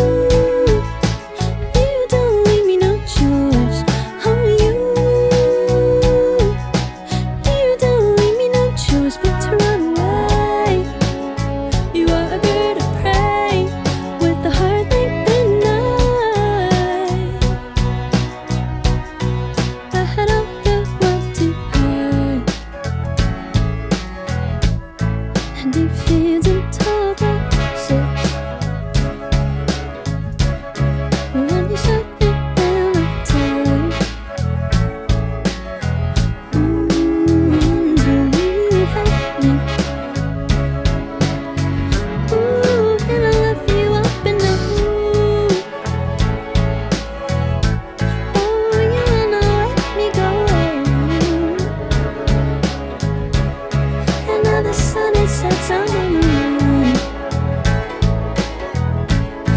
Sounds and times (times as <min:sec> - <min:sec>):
Music: 0:00.0 - 0:59.5
Singing: 0:54.1 - 0:57.1.